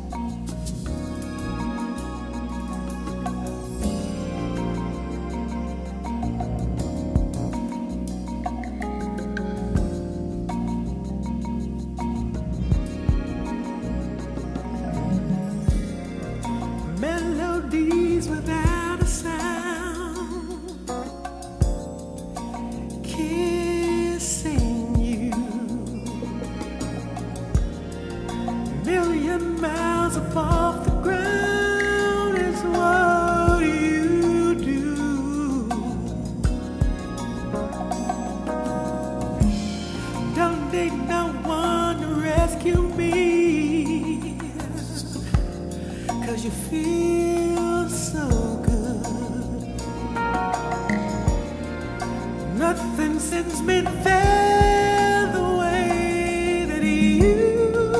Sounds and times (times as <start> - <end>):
Music: 0.0 - 57.9.